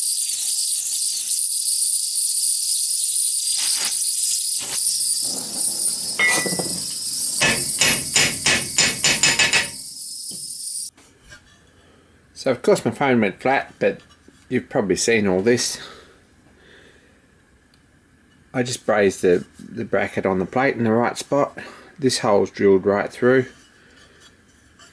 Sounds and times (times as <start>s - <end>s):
Speech: 12.4s - 15.9s, 18.6s - 23.6s.